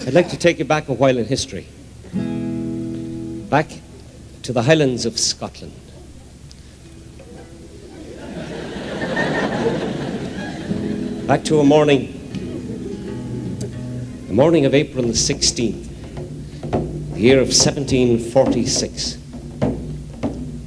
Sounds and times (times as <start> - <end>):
Speech: 0.0 - 1.8, 3.5 - 6.4, 11.3 - 12.2, 14.2 - 15.9, 17.2 - 19.2
Music: 2.0 - 4.2, 10.0 - 20.6.